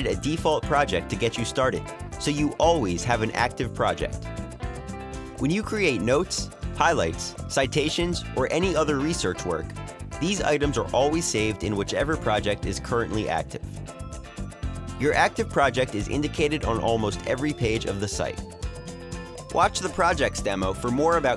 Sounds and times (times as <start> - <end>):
Speech: 0.0 - 4.2, 5.4 - 13.7, 15.0 - 18.4, 19.5 - 21.3
Music: 0.0 - 21.3.